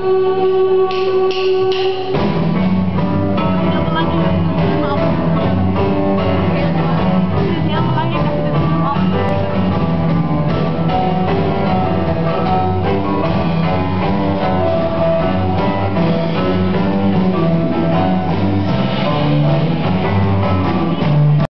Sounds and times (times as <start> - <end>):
Wedding music: 0.0 - 21.4.